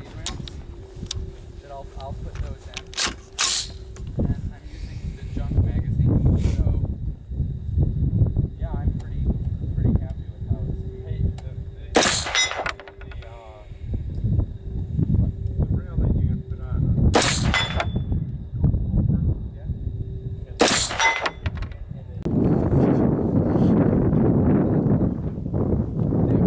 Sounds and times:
Speech: 0.0 - 0.5, 1.6 - 2.9, 4.2 - 6.9, 8.6 - 12.0, 13.0 - 13.7, 15.6 - 17.0, 18.9 - 19.8, 21.7 - 22.3
Outside, rural or natural: 0.0 - 26.4.

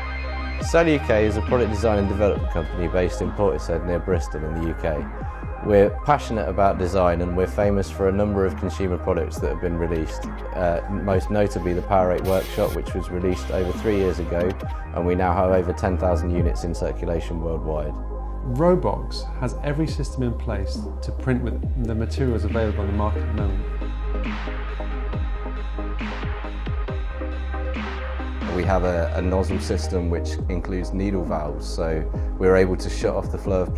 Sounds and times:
Music: 0.0 - 33.7
Speech: 0.6 - 23.7, 28.5 - 33.7.

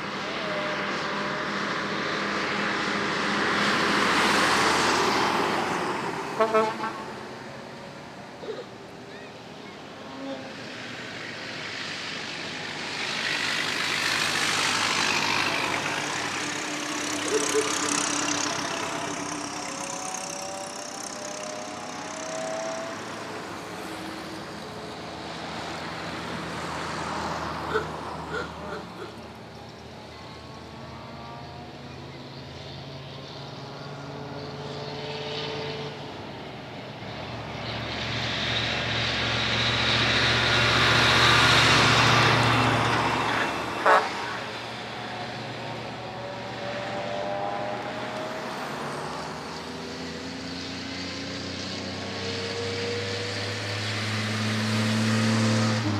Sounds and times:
Truck: 0.0 - 55.9.

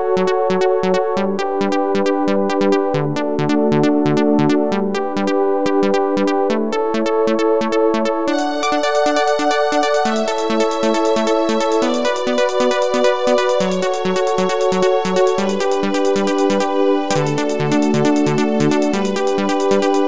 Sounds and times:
Exciting music: 8.3 - 20.0.

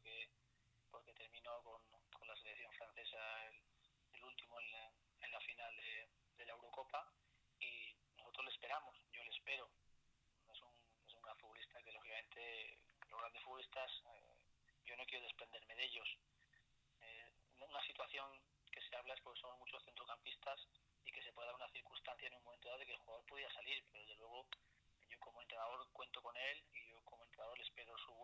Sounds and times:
Speech: 0.0 - 0.3, 0.9 - 9.8, 10.5 - 16.2, 17.0 - 28.2.

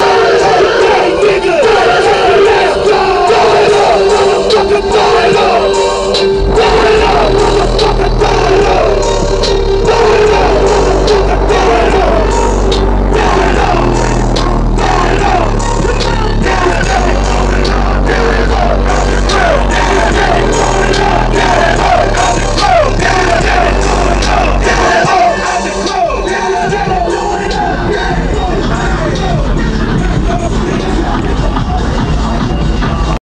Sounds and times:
Music: 0.0 - 33.2.

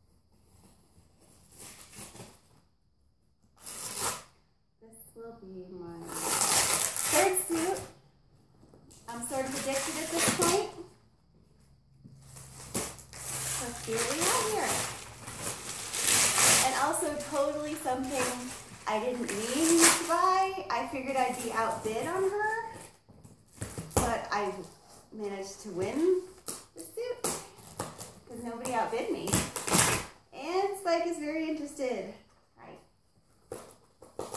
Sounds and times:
Speech: 7.1 - 7.9, 9.1 - 10.9, 13.6 - 14.9, 16.6 - 22.8, 24.0 - 27.3, 28.3 - 29.4, 30.4 - 32.8.

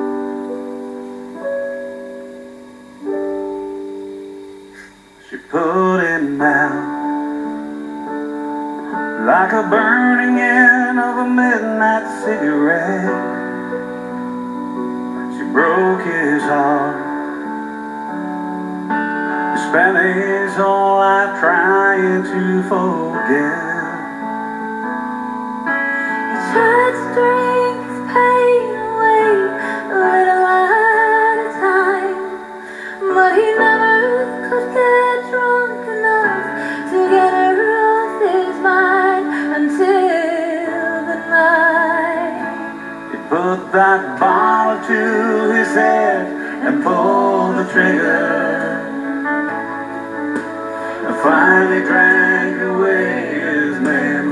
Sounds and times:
Music: 0.0 - 54.3.

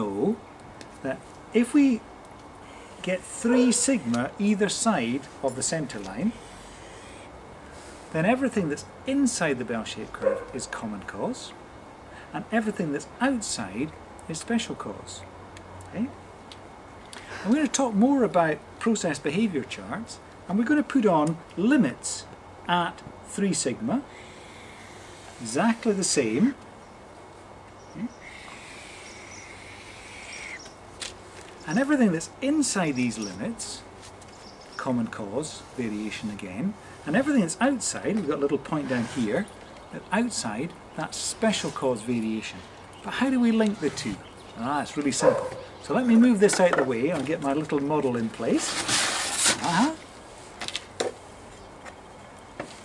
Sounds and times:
Speech: 0.0 - 0.4, 1.0 - 2.0, 3.0 - 6.4, 8.1 - 11.6, 12.3 - 15.3, 15.9 - 16.2, 17.4 - 24.1, 25.4 - 26.6, 28.0 - 28.2, 31.6 - 33.9, 34.8 - 48.8, 49.5 - 50.0.

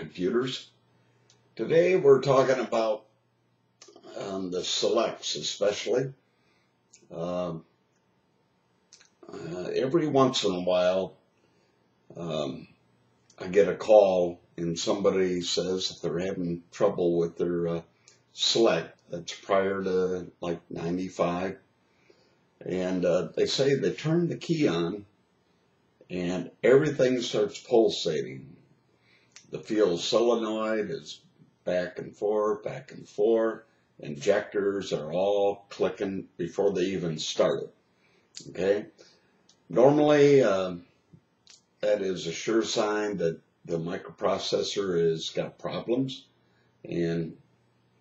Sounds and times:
Speech: 0.0 - 0.6, 1.6 - 3.0, 3.8 - 6.1, 7.0 - 7.6, 9.2 - 11.1, 12.1 - 12.7, 13.4 - 17.8, 18.4 - 21.6, 22.6 - 25.0, 26.1 - 28.6, 29.4 - 37.7, 38.4 - 38.9, 39.7 - 40.8, 41.8 - 46.2, 46.9 - 47.4.

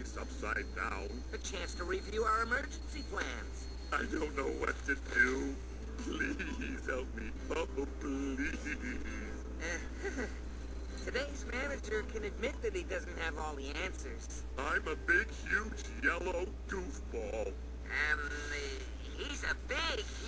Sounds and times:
Speech: 0.0 - 9.3, 11.1 - 20.2.

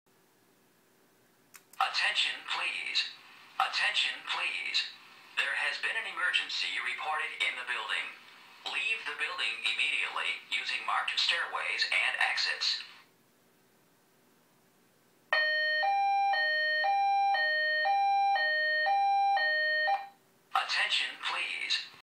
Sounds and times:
Speech: 1.8 - 13.0, 20.6 - 22.0.

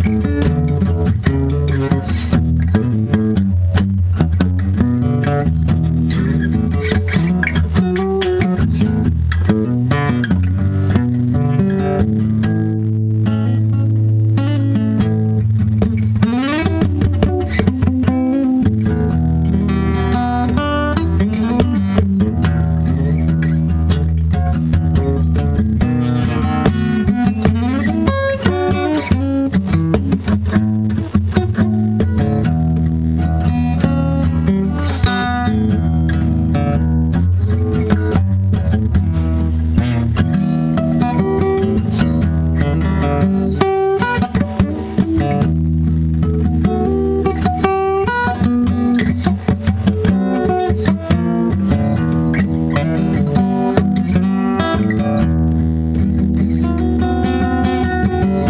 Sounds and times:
Acoustic guitar: 0.0 - 58.5.

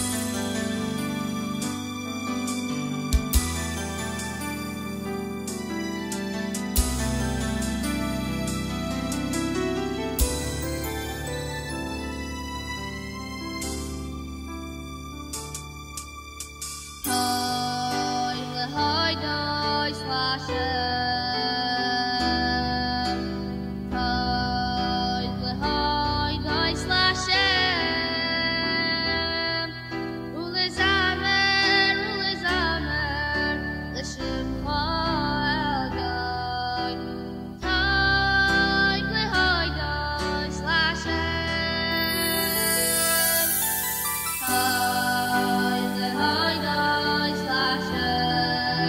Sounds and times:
Music: 0.0 - 48.8
Female singing: 17.1 - 43.6, 44.4 - 48.8.

